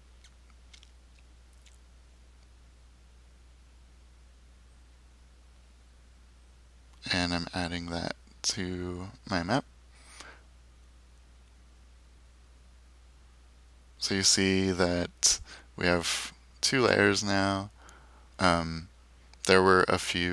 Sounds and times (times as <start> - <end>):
Speech: 7.0 - 9.6, 14.0 - 17.7, 18.4 - 20.3.